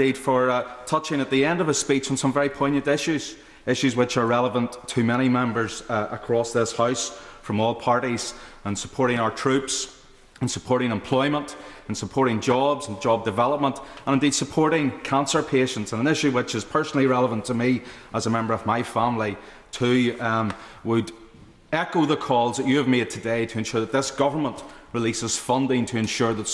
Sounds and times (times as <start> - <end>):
Male speech, man speaking: 0.0 - 26.5
Narration, monologue: 0.0 - 26.5.